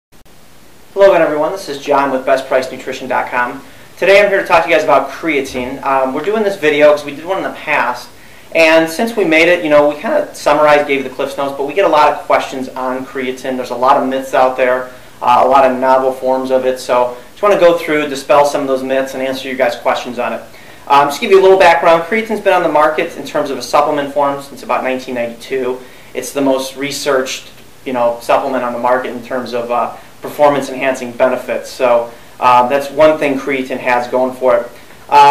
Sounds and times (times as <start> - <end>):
Inside, small room: 0.2 - 35.3
Speech: 1.0 - 35.3.